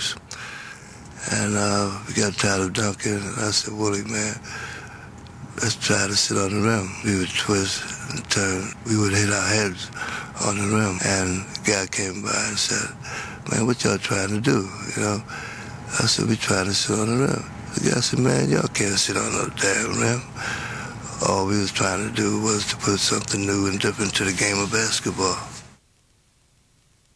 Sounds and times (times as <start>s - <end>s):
Speech: 0.0s - 0.2s, 1.2s - 4.4s, 5.6s - 15.3s, 15.9s - 20.3s, 21.0s - 25.6s.